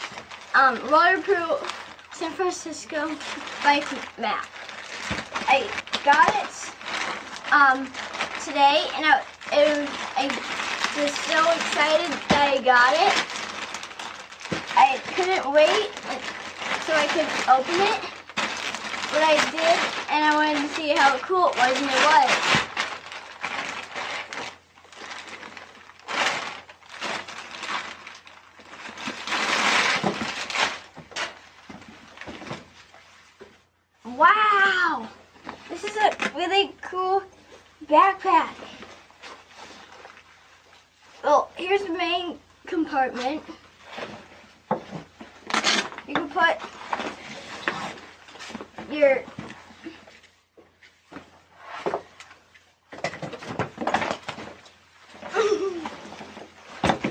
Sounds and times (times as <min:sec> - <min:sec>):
Speech: 0:00.6 - 0:04.5, 0:05.4 - 0:06.8, 0:07.5 - 0:13.2, 0:14.8 - 0:18.2, 0:19.1 - 0:22.4, 0:34.0 - 0:38.8, 0:41.2 - 0:43.6, 0:46.1 - 0:46.7, 0:48.9 - 0:49.3.